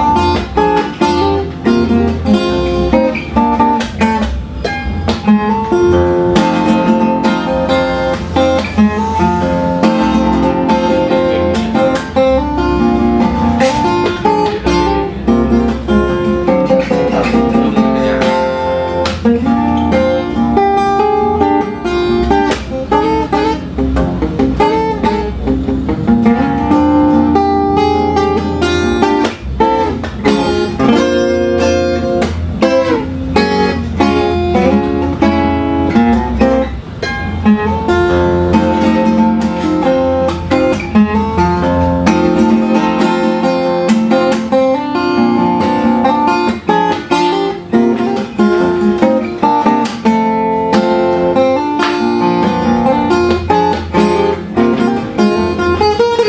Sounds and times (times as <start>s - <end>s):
Acoustic guitar: 0.0s - 56.2s
Strum: 0.0s - 56.2s
Speech: 16.8s - 18.5s.